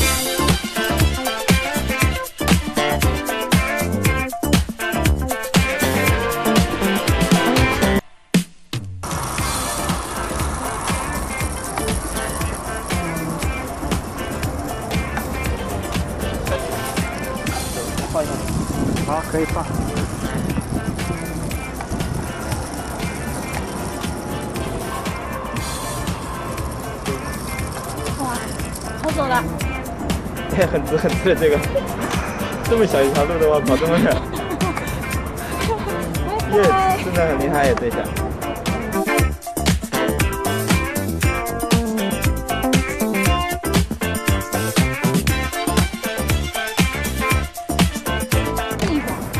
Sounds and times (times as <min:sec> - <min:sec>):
Music: 0:00.0 - 0:49.3.